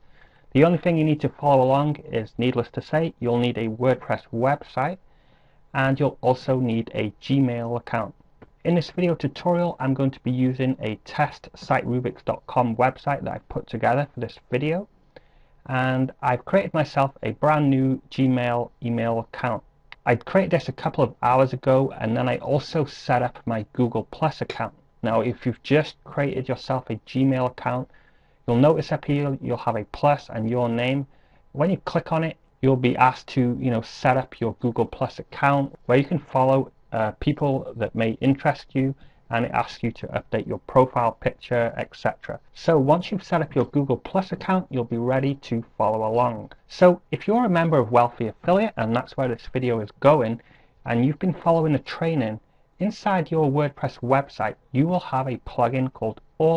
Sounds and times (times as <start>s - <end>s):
Speech: 0.5s - 5.0s, 5.7s - 14.9s, 15.7s - 27.9s, 28.5s - 56.5s.